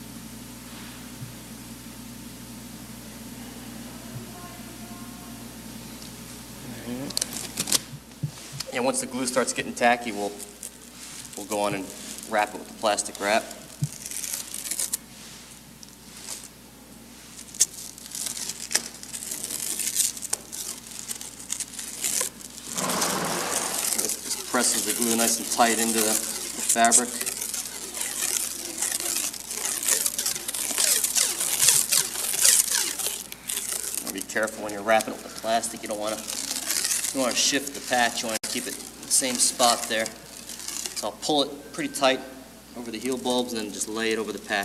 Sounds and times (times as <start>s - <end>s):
Speech: 8.7s - 10.5s, 11.4s - 13.6s, 24.0s - 27.3s, 34.1s - 36.3s, 37.1s - 40.2s, 41.0s - 44.6s.